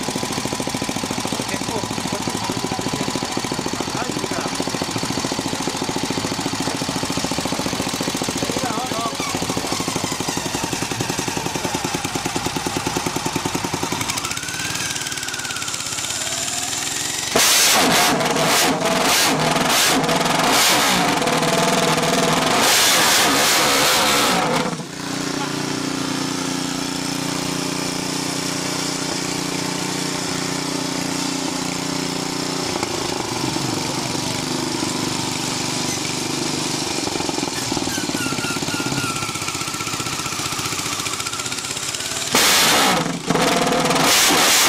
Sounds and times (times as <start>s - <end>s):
Speech: 1.4s - 3.1s, 3.8s - 4.6s, 8.5s - 9.8s.